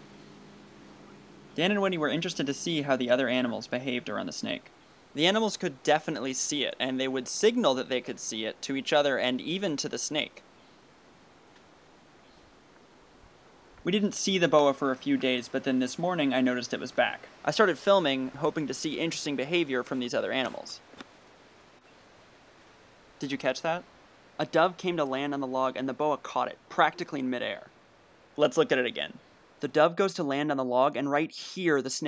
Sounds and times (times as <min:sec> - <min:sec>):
Speech: 0:01.6 - 0:10.4, 0:13.9 - 0:20.8, 0:23.2 - 0:23.8, 0:24.4 - 0:27.7, 0:28.4 - 0:32.0.